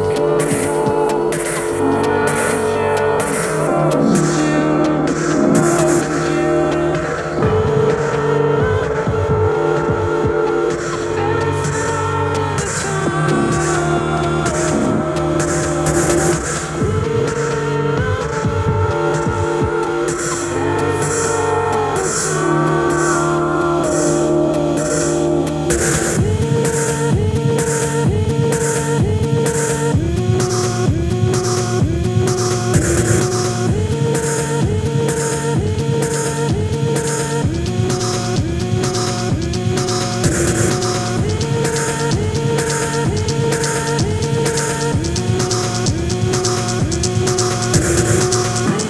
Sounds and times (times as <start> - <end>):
Music: 0.0 - 48.8.